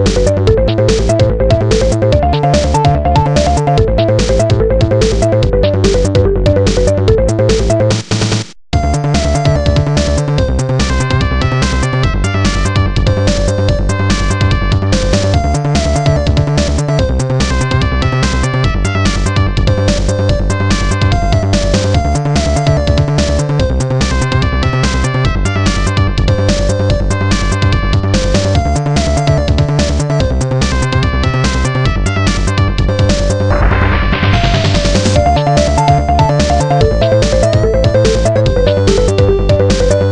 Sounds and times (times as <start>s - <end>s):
Video game music: 0.0s - 40.1s.